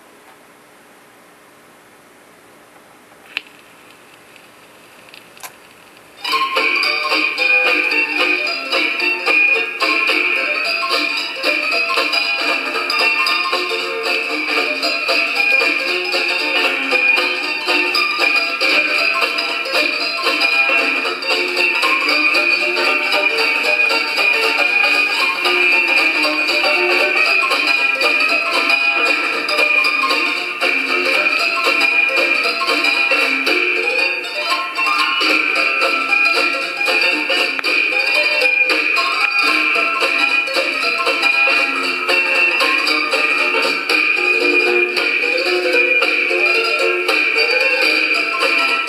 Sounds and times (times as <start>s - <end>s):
Blues: 6.2s - 48.8s.